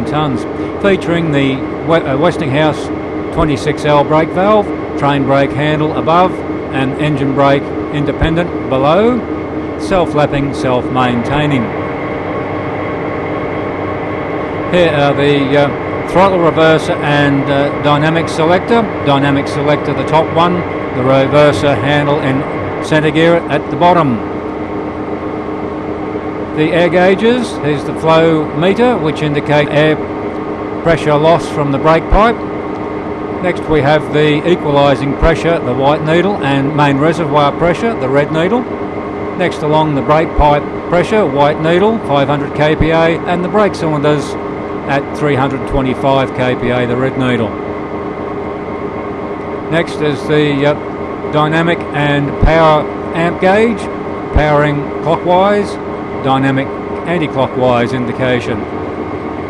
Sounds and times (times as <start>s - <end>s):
Speech: 0.0s - 9.2s, 9.8s - 11.8s, 14.7s - 24.3s, 26.6s - 30.0s, 30.9s - 32.4s, 33.4s - 38.7s, 39.4s - 47.6s, 49.7s - 58.7s
Heavy engine (low frequency): 0.0s - 59.5s
Idling: 0.0s - 59.5s.